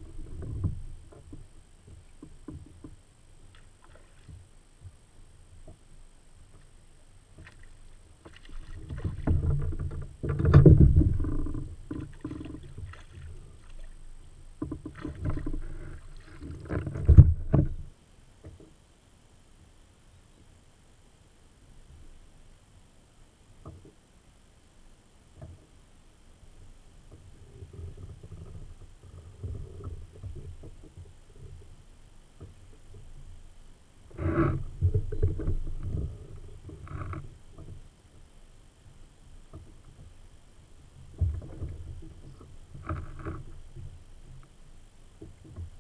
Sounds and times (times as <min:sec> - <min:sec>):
Rowboat, canoe, kayak: 0:00.0 - 0:45.8.